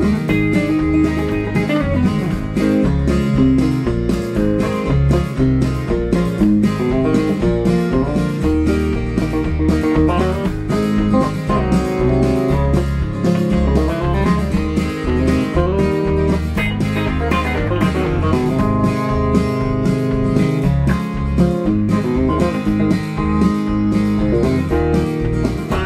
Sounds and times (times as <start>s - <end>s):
Music: 0.0s - 25.8s.